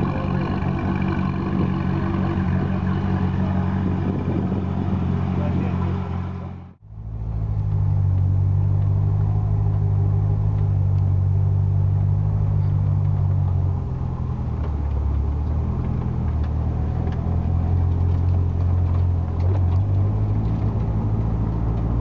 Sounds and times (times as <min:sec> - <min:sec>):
Speech: 0:00.0 - 0:06.5
Car: 0:00.0 - 0:22.0
Outside, urban or manmade: 0:00.0 - 0:22.0.